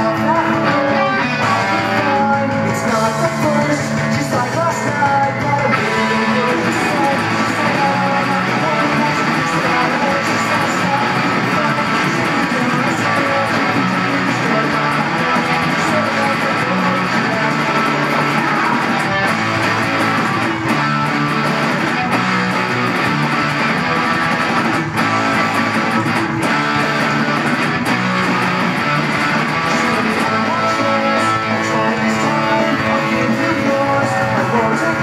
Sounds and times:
Bass guitar: 0.0 - 35.0.

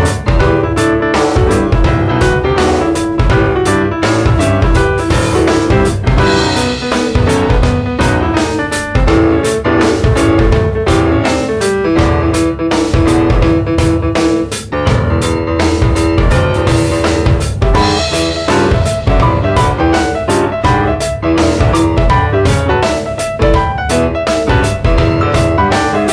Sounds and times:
Music: 0.0 - 26.1.

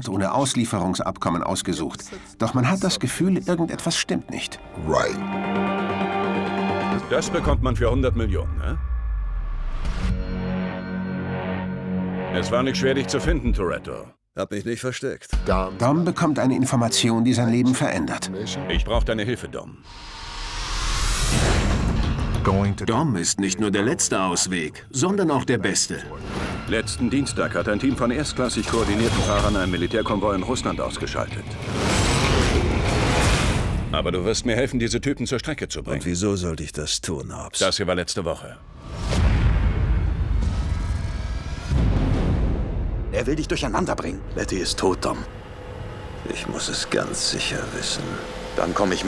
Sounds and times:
Speech: 0.0 - 5.2, 7.0 - 8.8, 12.4 - 19.8, 22.4 - 31.6, 33.9 - 38.6, 43.1 - 45.3, 46.2 - 49.0
Music: 0.0 - 14.2, 15.3 - 35.6, 38.6 - 49.0.

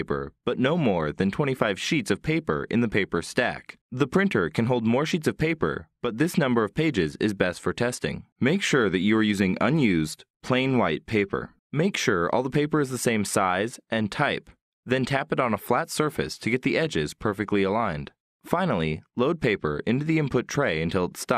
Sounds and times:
Speech: 0.0 - 21.3.

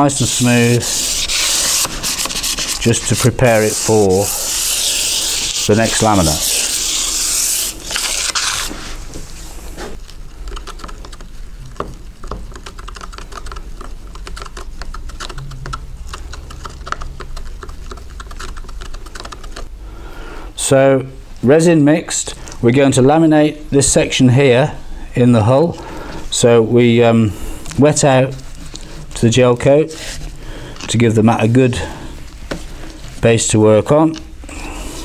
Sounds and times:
Speech: 0.0 - 0.8, 2.8 - 4.3, 5.6 - 6.5, 20.6 - 28.4, 29.2 - 30.0, 30.9 - 31.9, 33.2 - 34.2.

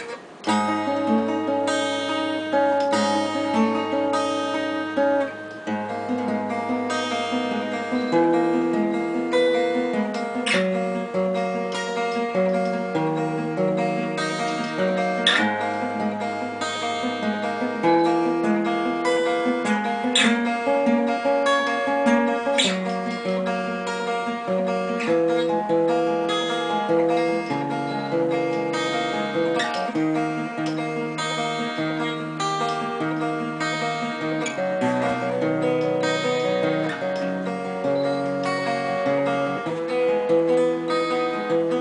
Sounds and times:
Acoustic guitar: 0.0 - 41.8
Strum: 0.0 - 41.8.

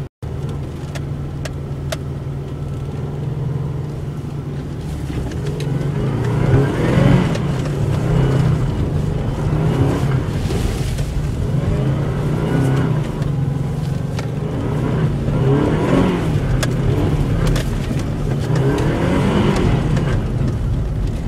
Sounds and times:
Car: 0.0 - 21.2.

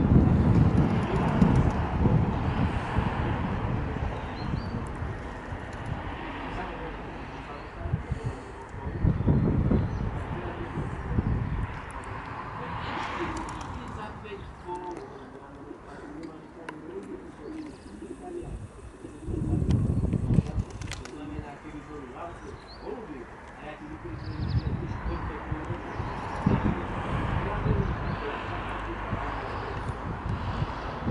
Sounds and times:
Speech: 0.9 - 2.3, 6.4 - 9.1, 10.2 - 11.4, 12.5 - 30.0
Bird: 14.4 - 21.4, 24.1 - 26.6.

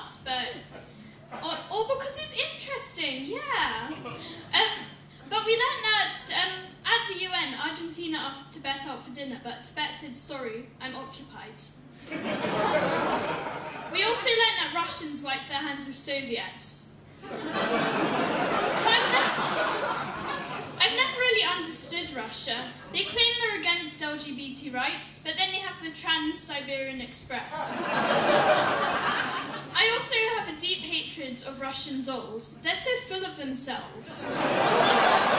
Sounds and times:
Child speech, kid speaking: 20.8 - 27.5.

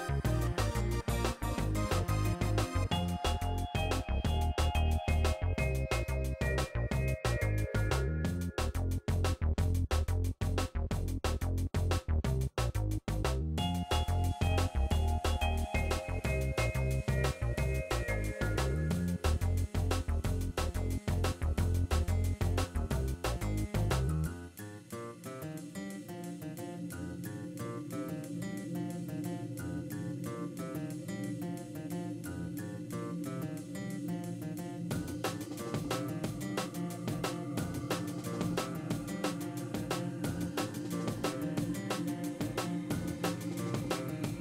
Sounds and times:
Background music: 0.0 - 44.4
Rhythm and blues: 0.0 - 44.4.

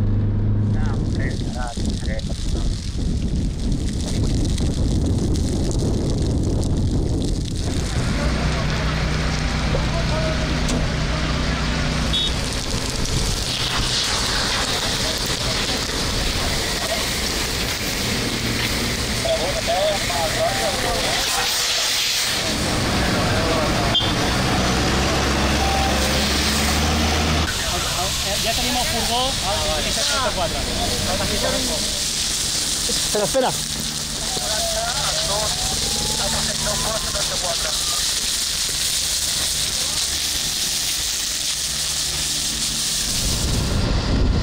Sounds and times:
Fire: 0.0 - 44.4.

